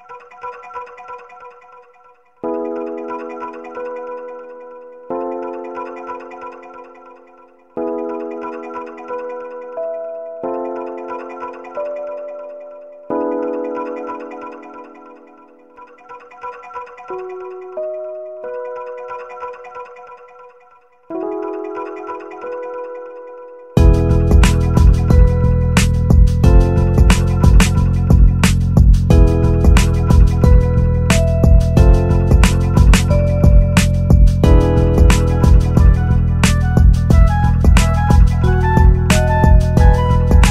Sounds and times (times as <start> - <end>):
Music: 0.0 - 40.5.